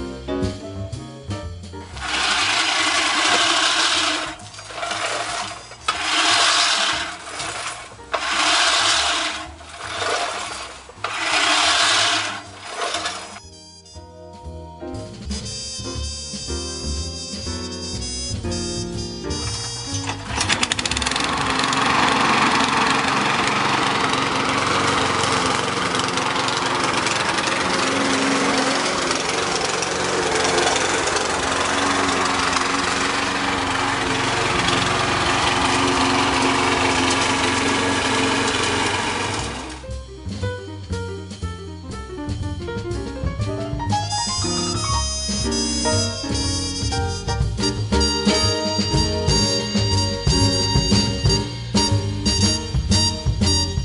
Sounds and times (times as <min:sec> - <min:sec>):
Outside, urban or manmade: 0:01.2 - 0:16.5, 0:17.2 - 0:53.8
Lawn mower: 0:01.9 - 0:13.4, 0:19.3 - 0:39.9, 0:45.0 - 0:53.8.